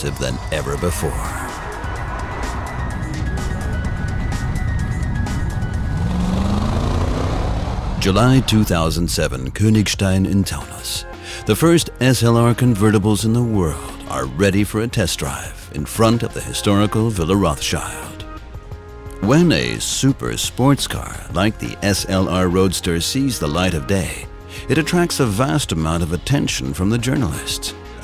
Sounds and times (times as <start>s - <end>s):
Speech: 0.0s - 1.5s, 8.0s - 18.2s, 19.2s - 27.8s
Music: 0.0s - 28.0s.